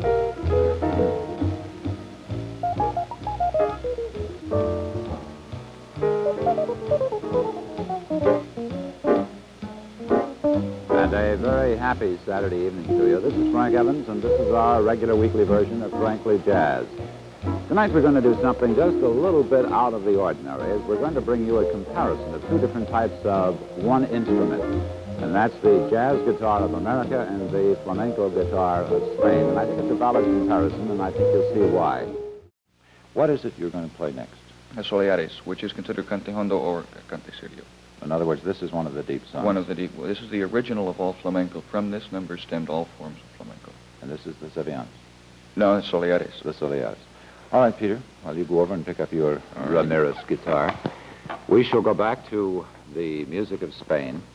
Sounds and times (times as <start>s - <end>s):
Acoustic guitar: 0.0s - 32.5s
Speech: 10.9s - 16.9s, 17.7s - 32.2s, 33.2s - 44.9s, 45.6s - 50.9s, 51.5s - 54.3s.